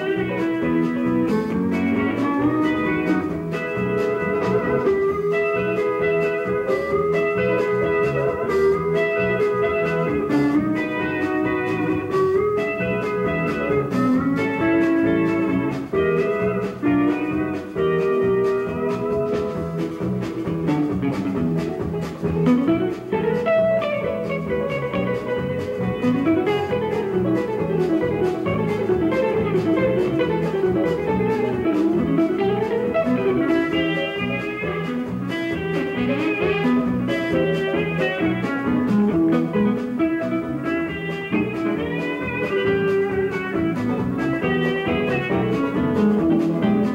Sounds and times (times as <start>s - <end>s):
Steel guitar, slide guitar: 0.0s - 46.9s.